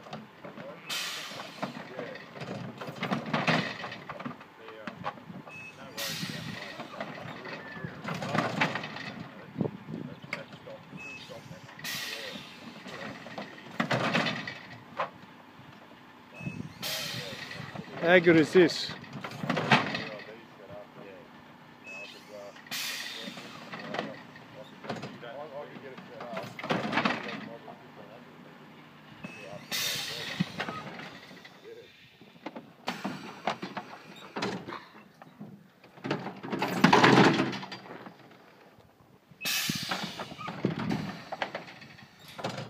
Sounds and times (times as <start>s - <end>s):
Speech: 4.0s - 5.0s, 5.7s - 8.0s, 9.1s - 13.2s, 16.9s - 19.0s, 19.9s - 21.3s, 21.9s - 22.6s, 23.2s - 26.6s, 27.3s - 28.4s, 29.3s - 30.6s.